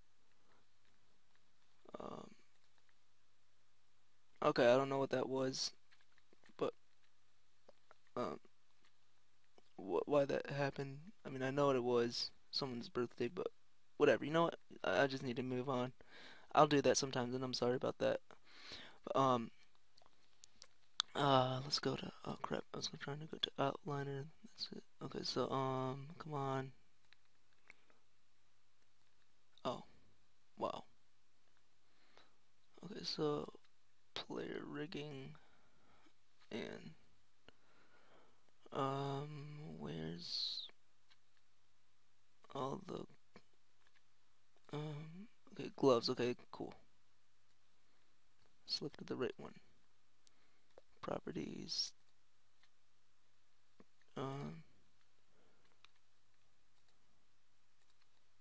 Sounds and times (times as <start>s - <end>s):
Inside, small room: 0.0s - 58.4s
Speech: 1.9s - 2.4s, 4.4s - 5.8s, 8.2s - 8.4s, 9.7s - 18.4s, 19.0s - 19.6s, 21.0s - 26.8s, 29.6s - 30.0s, 30.6s - 30.9s, 32.8s - 33.6s, 34.2s - 35.5s, 36.5s - 37.0s, 38.7s - 40.8s, 42.5s - 43.2s, 44.7s - 46.8s, 48.7s - 49.7s, 51.0s - 52.0s, 54.1s - 54.7s.